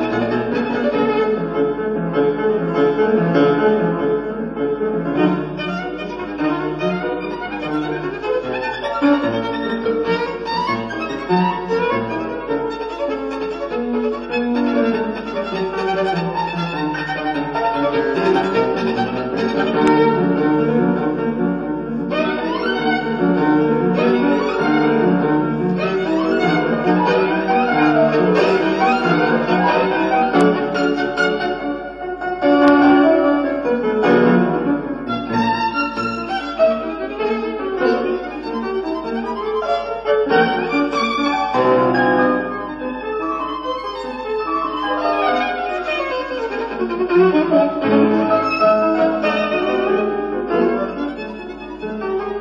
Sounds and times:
Violin, fiddle: 0.0 - 3.6, 5.0 - 52.4.

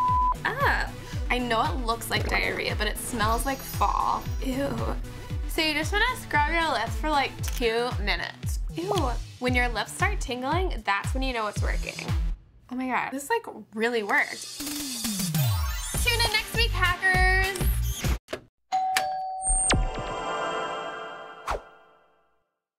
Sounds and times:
Music: 0.0 - 12.4, 14.4 - 18.2
Speech: 0.5 - 5.0, 5.6 - 12.1, 12.7 - 14.4, 16.0 - 17.6.

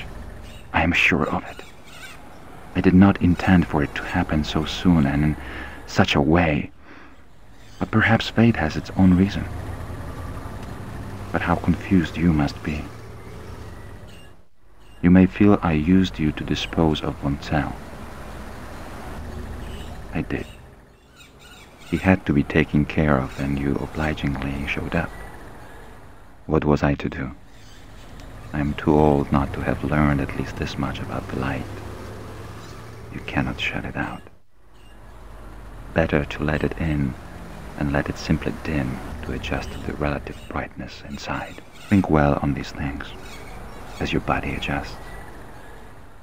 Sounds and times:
Bird: 0.0 - 5.8, 6.9 - 10.0, 10.6 - 17.8, 19.6 - 26.0, 27.4 - 35.3, 38.0 - 46.0
Speech: 0.8 - 1.6, 2.8 - 6.8, 7.8 - 9.5, 11.4 - 12.9, 15.0 - 17.8, 20.1 - 20.5, 21.9 - 25.1, 26.5 - 27.4, 28.5 - 31.7, 33.2 - 34.3, 36.0 - 37.2, 37.8 - 43.2, 44.0 - 45.0.

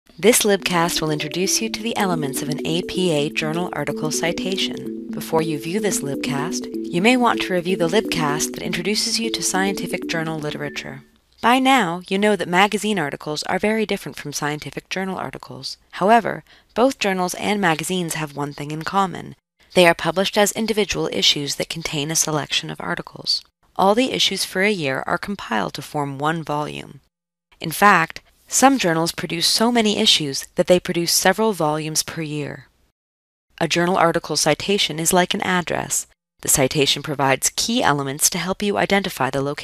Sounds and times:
Narration, monologue: 0.1 - 32.9, 33.6 - 39.6.

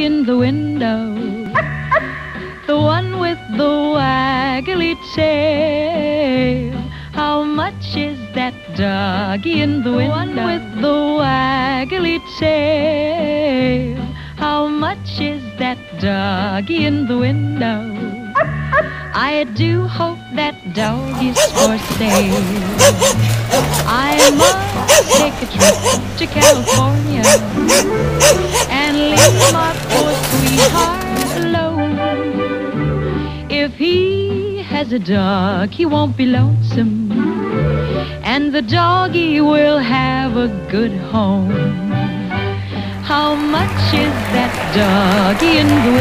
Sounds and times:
Music: 0.0 - 46.0
Bow-wow: 20.8 - 31.5.

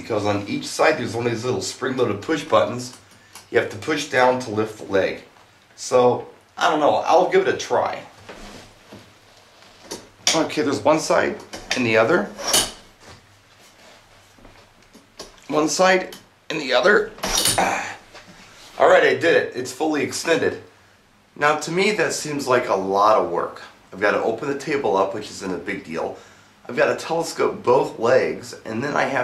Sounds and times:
Speech: 0.0 - 8.2, 10.3 - 12.4, 15.5 - 18.0, 18.8 - 20.7, 21.4 - 29.2
Inside, small room: 0.0 - 29.2.

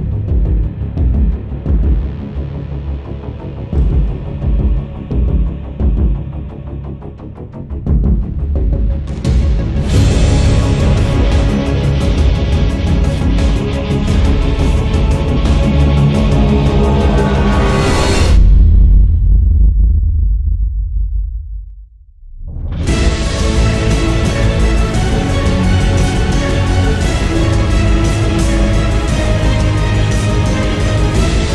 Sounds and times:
Music: 0.0 - 31.5.

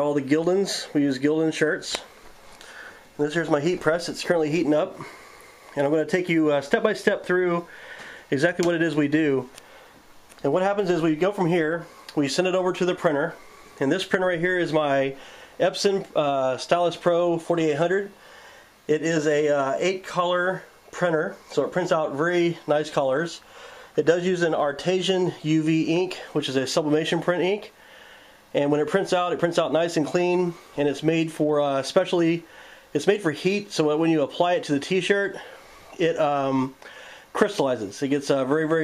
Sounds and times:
Speech: 0.0 - 2.1, 3.2 - 5.1, 5.8 - 7.7, 8.3 - 9.6, 10.4 - 18.2, 18.9 - 23.4, 24.0 - 27.8, 28.5 - 38.8.

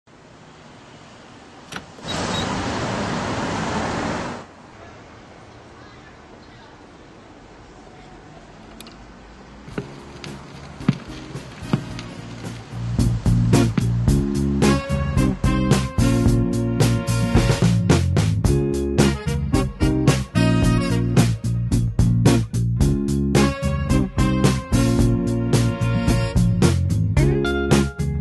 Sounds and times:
Speech: 4.7 - 8.7.

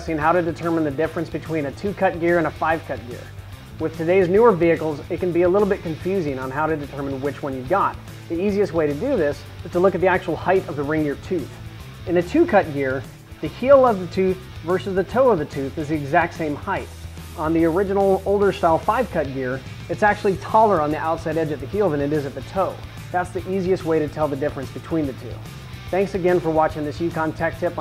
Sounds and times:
Music: 0.0 - 27.8
Speech: 0.0 - 27.8.

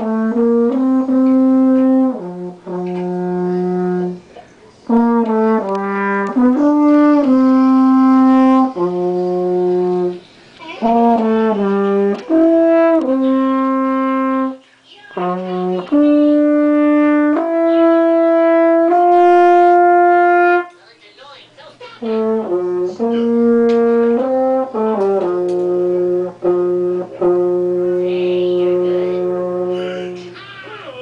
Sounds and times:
French horn: 0.0 - 14.6, 15.2 - 20.7, 22.0 - 30.3
Speech: 14.9 - 16.4, 27.9 - 31.0.

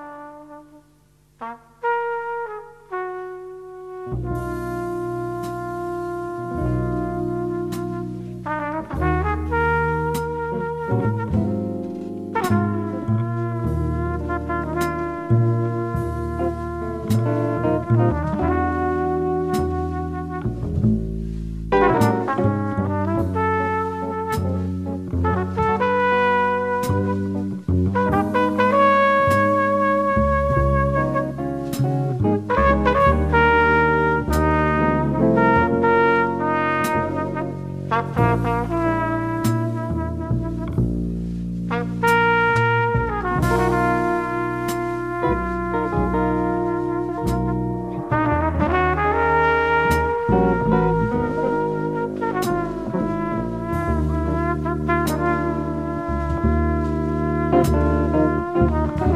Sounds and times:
Music: 0.0 - 59.1.

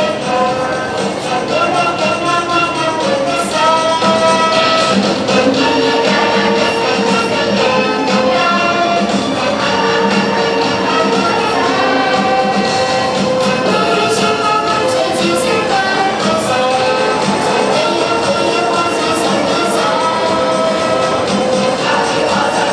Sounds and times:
Child singing: 0.0 - 22.7
Choir: 0.0 - 22.7.

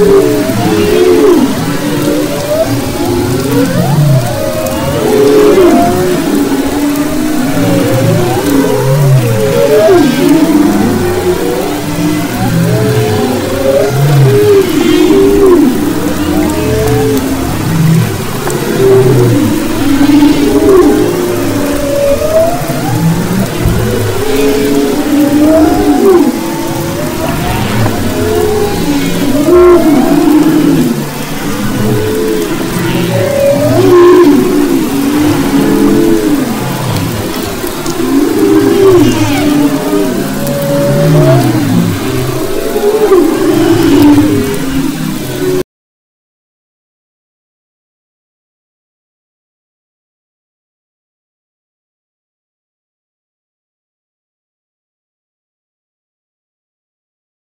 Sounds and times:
Whale vocalization: 0.0 - 45.7.

